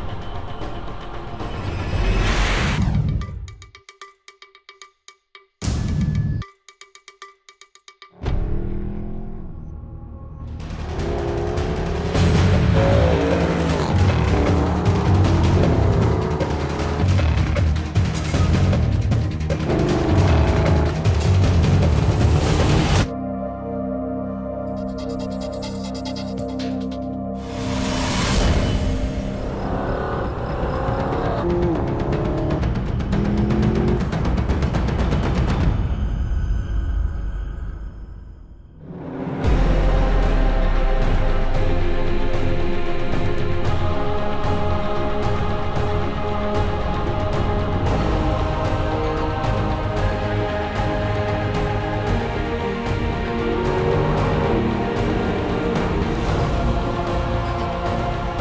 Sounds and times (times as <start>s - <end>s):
Music: 0.0s - 58.4s
Car: 10.6s - 22.6s, 29.3s - 34.7s.